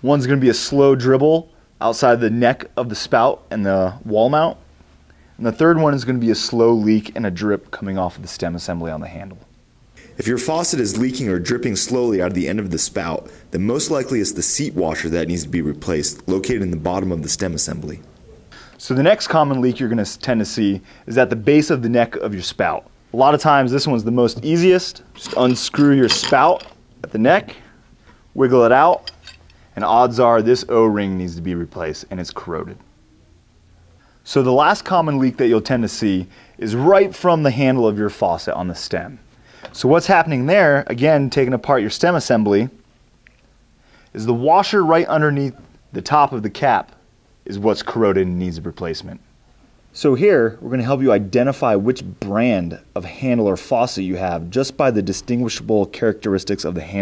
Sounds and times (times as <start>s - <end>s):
Speech: 0.0s - 4.6s, 5.4s - 18.1s, 18.8s - 27.7s, 28.4s - 29.1s, 29.8s - 32.9s, 34.2s - 39.2s, 39.8s - 42.8s, 44.2s - 49.3s, 50.0s - 57.0s.